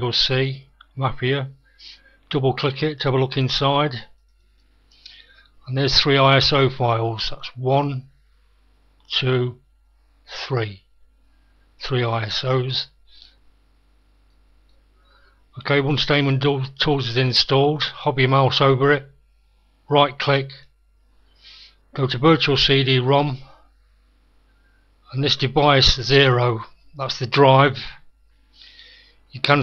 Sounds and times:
Speech: 0.0s - 4.2s, 5.6s - 8.1s, 9.1s - 9.6s, 10.3s - 10.9s, 11.8s - 13.0s, 15.6s - 19.2s, 19.9s - 20.7s, 22.0s - 23.6s, 25.1s - 28.1s, 29.3s - 29.6s.

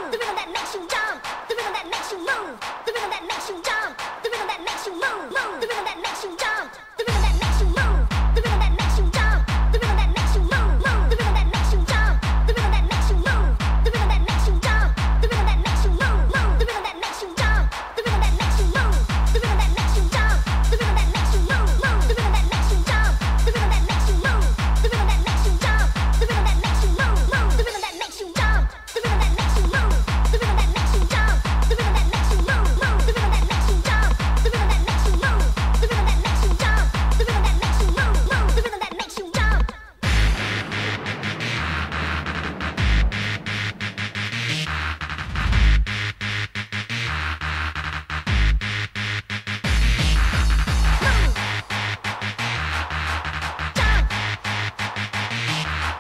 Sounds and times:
Music: 0.0s - 56.0s.

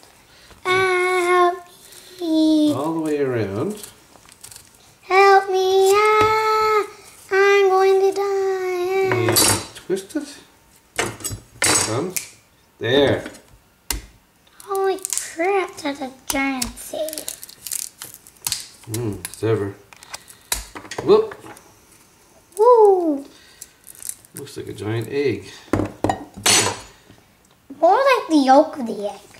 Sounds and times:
Inside, small room: 0.0s - 29.3s.

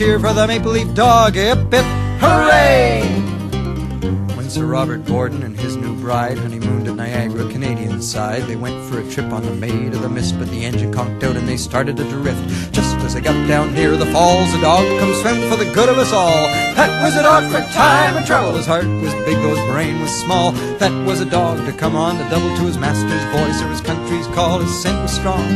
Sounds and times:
Music: 0.0s - 25.5s.

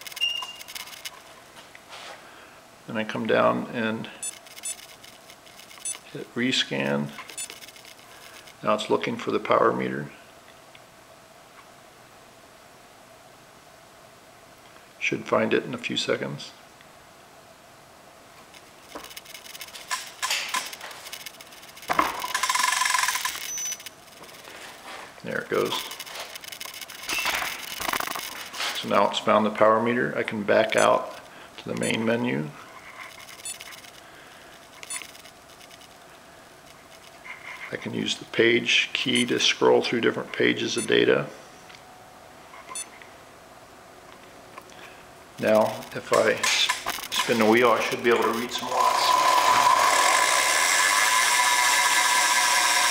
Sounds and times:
Speech: 2.9s - 4.2s, 6.1s - 7.2s, 8.6s - 10.2s, 15.0s - 16.6s, 25.2s - 25.9s, 28.8s - 32.6s, 37.7s - 41.4s, 45.4s - 49.2s.

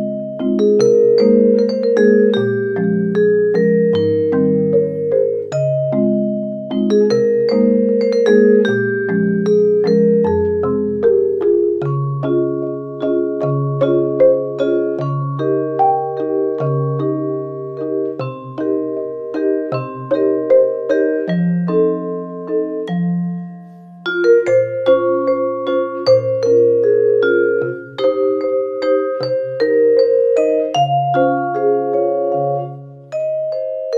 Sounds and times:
Glockenspiel: 0.0s - 33.9s
Marimba, xylophone: 0.0s - 33.9s.

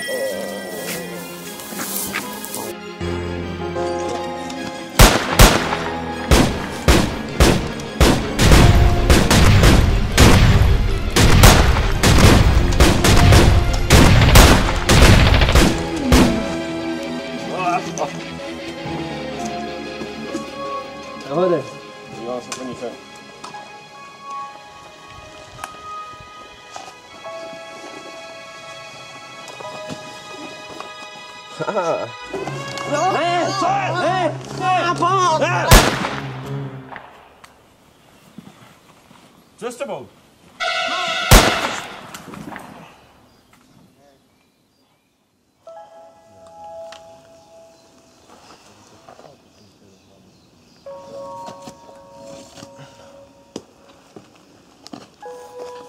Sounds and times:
Gunshot, gunfire: 5.0s - 16.4s, 35.7s - 36.3s, 40.7s - 42.1s.

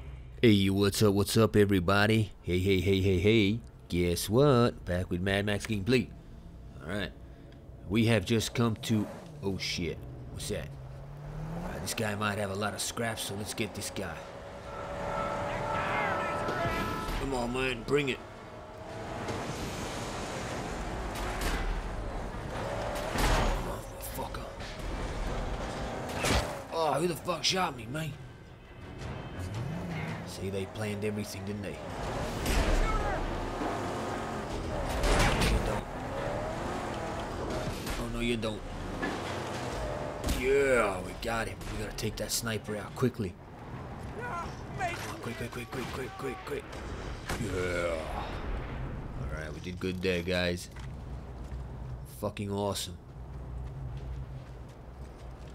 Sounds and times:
Speech: 7.9s - 10.7s, 11.7s - 14.2s, 30.3s - 31.8s, 40.3s - 43.4s, 44.2s - 46.6s, 52.1s - 53.0s.

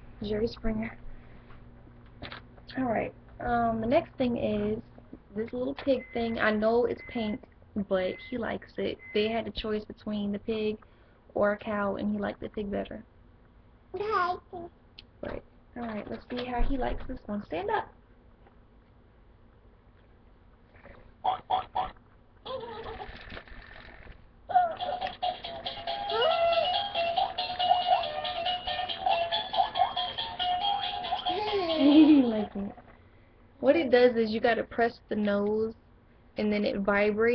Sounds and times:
Inside, small room: 0.0s - 37.3s
Speech: 0.2s - 1.0s, 2.7s - 10.8s, 11.4s - 13.1s, 14.0s - 18.0s, 33.6s - 35.8s, 36.4s - 37.3s
Music: 24.8s - 32.0s.

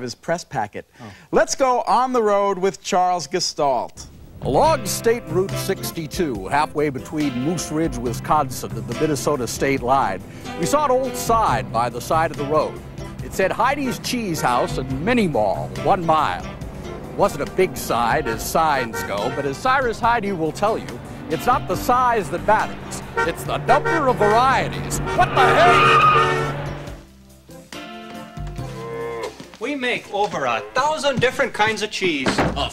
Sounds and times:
Speech: 0.0s - 16.5s, 17.2s - 25.1s, 29.6s - 32.7s
Music: 4.4s - 32.7s.

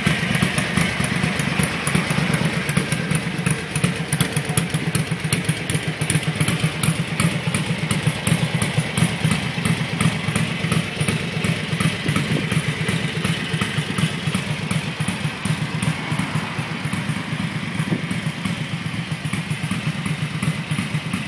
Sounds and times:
Heavy engine (low frequency): 0.0s - 21.2s
Vehicle: 0.0s - 21.2s.

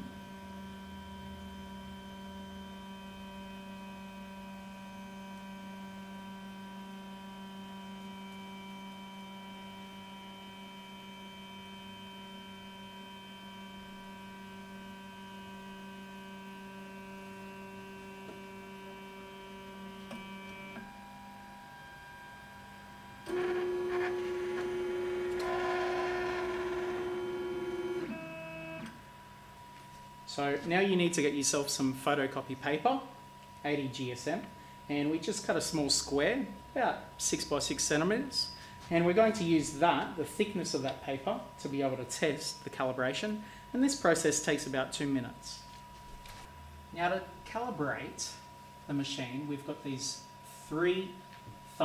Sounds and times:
Printer: 7.0s - 29.0s.

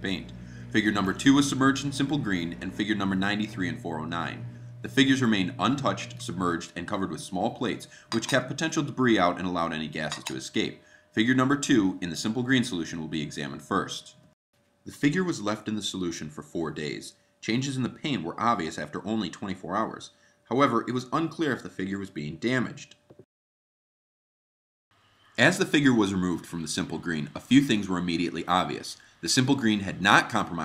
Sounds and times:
Speech: 0.0s - 14.2s, 14.9s - 23.0s, 25.4s - 30.6s.

